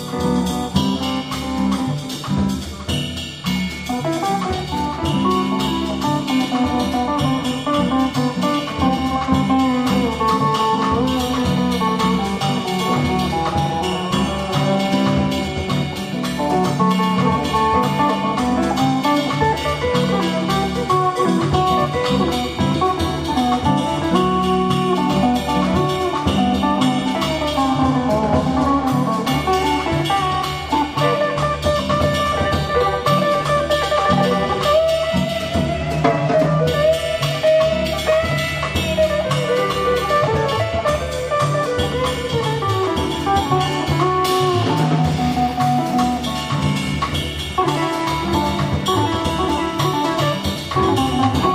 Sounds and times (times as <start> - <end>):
Music: 0.0 - 51.5.